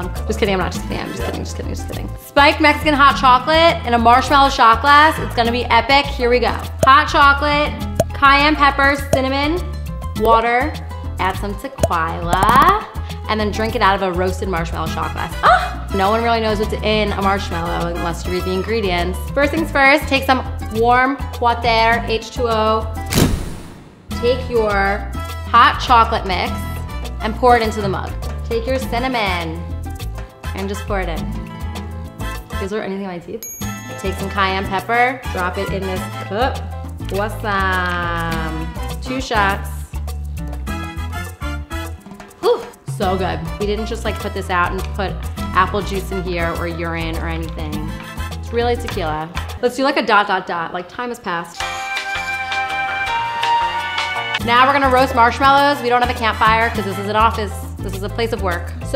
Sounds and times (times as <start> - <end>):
Speech: 0.0 - 9.6, 10.2 - 22.9, 24.2 - 26.6, 27.2 - 29.6, 30.5 - 31.3, 32.6 - 33.4, 34.0 - 39.9, 42.4 - 47.9, 48.5 - 51.6, 54.4 - 58.9
Music: 0.0 - 58.9.